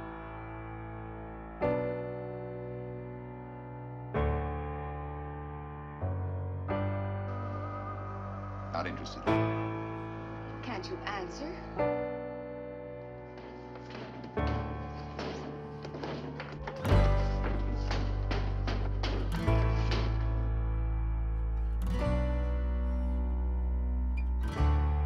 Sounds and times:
Music: 0:00.0 - 0:25.0.

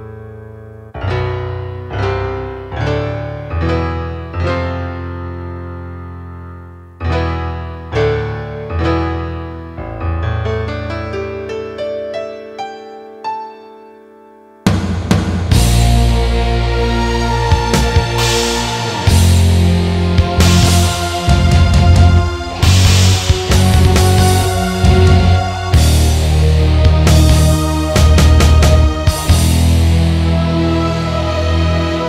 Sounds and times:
Heavy metal: 0:14.7 - 0:32.0
Progressive rock: 0:14.7 - 0:32.0
Guitar: 0:15.3 - 0:32.0.

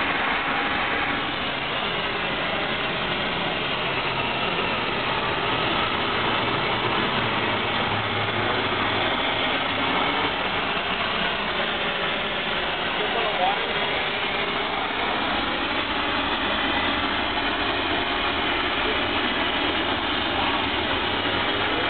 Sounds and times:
Spray: 0:00.0 - 0:21.8
Speech: 0:12.9 - 0:14.0.

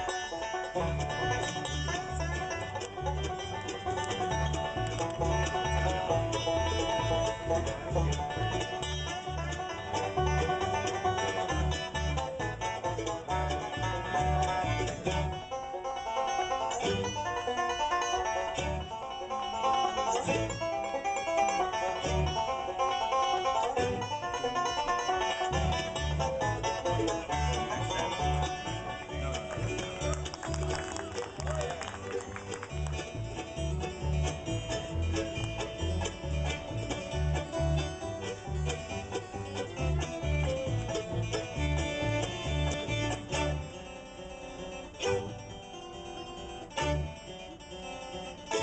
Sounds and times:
Banjo: 0:00.0 - 0:48.6.

